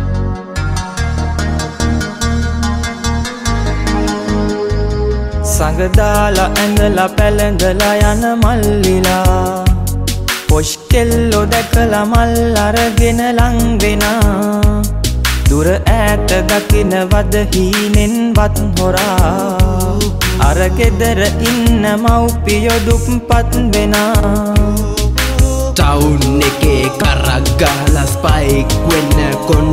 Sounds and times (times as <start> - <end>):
Music: 0.0 - 29.7.